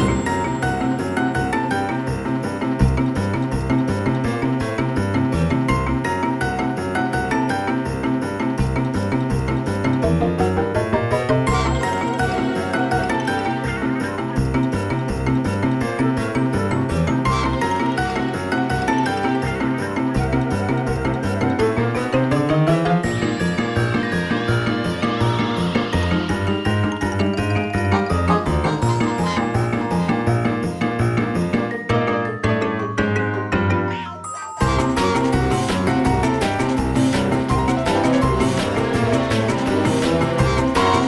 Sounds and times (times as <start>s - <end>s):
Soundtrack music: 0.0s - 41.0s.